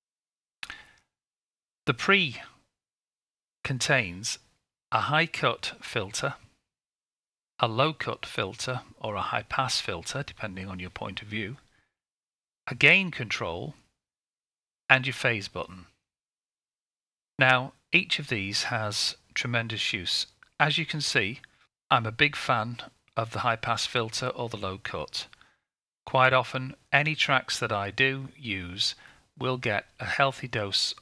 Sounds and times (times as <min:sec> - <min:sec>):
Inside, small room: 0:00.6 - 0:01.2, 0:03.6 - 0:06.7, 0:07.6 - 0:12.1, 0:12.7 - 0:14.0, 0:14.9 - 0:16.1, 0:17.4 - 0:31.0
Speech: 0:01.9 - 0:02.6, 0:03.6 - 0:06.5, 0:07.6 - 0:11.7, 0:12.7 - 0:13.9, 0:14.9 - 0:16.0, 0:17.4 - 0:25.4, 0:26.1 - 0:31.0.